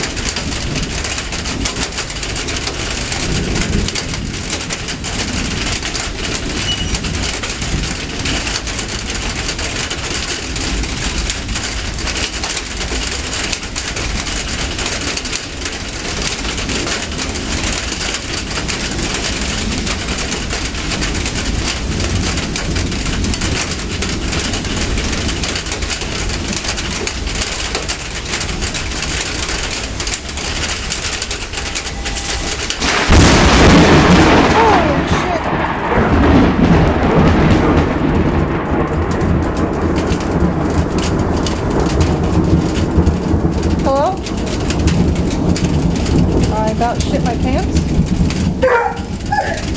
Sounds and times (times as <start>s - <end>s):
Thunderstorm: 0.0s - 49.7s
Speech: 34.5s - 35.5s, 43.9s - 44.2s, 46.5s - 47.7s.